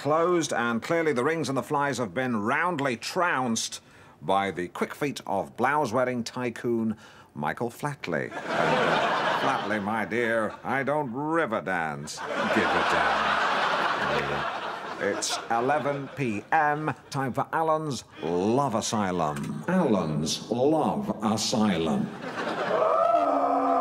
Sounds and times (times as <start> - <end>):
Speech: 0.0 - 8.3, 9.4 - 13.2, 14.0 - 22.2.